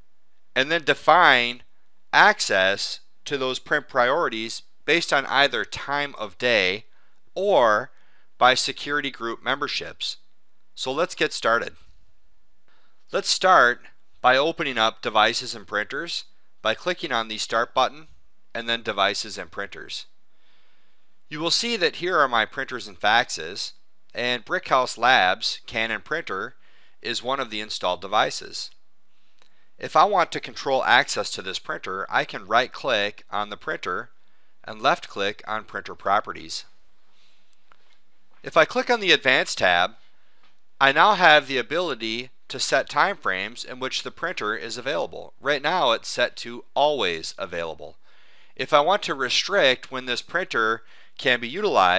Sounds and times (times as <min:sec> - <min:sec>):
Speech: 0:00.6 - 0:10.2, 0:10.8 - 0:11.8, 0:13.1 - 0:20.1, 0:21.3 - 0:28.8, 0:29.8 - 0:36.7, 0:38.4 - 0:40.0, 0:40.8 - 0:48.0, 0:48.6 - 0:51.9.